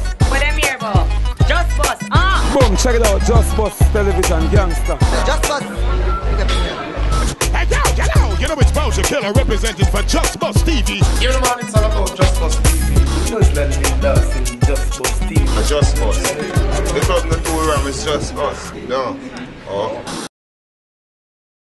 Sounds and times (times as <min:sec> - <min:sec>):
Music: 0:00.0 - 0:19.2
Television: 0:16.2 - 0:20.3.